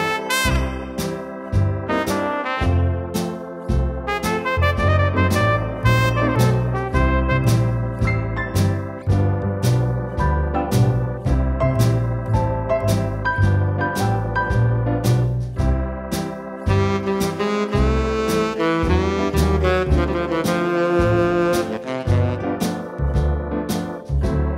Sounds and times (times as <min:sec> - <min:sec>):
Electronic organ: 0:00.0 - 0:24.5.